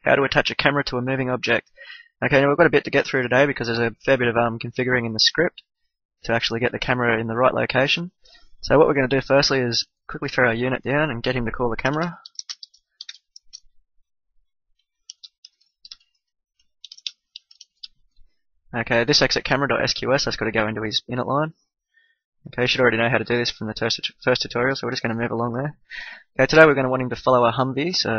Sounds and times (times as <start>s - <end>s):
Speech: 0.0s - 5.6s, 6.2s - 12.4s, 18.8s - 21.6s, 22.5s - 25.8s, 26.4s - 28.1s.